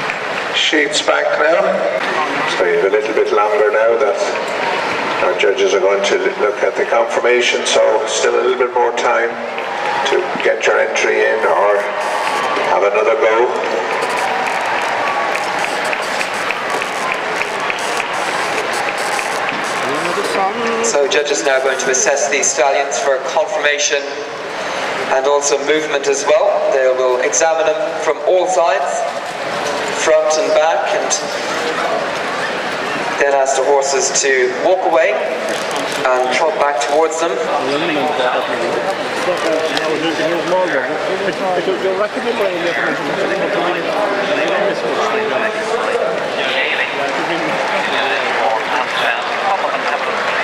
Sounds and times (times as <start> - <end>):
Speech: 0.6 - 4.4, 5.2 - 9.4, 10.0 - 12.0, 12.7 - 13.8, 19.8 - 24.3, 25.1 - 29.1, 30.0 - 32.0, 33.2 - 35.3, 36.0 - 50.4.